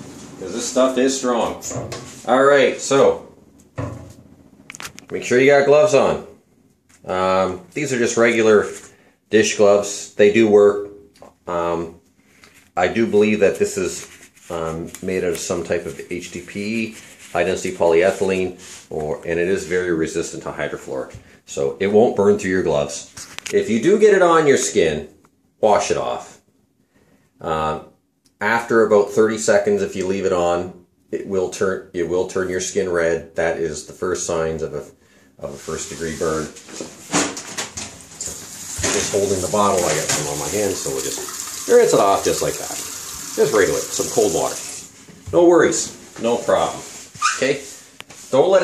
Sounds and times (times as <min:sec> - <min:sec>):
Speech: 0:00.4 - 0:03.3, 0:05.1 - 0:06.4, 0:07.0 - 0:12.0, 0:12.8 - 0:26.4, 0:27.4 - 0:36.7, 0:38.2 - 0:48.6.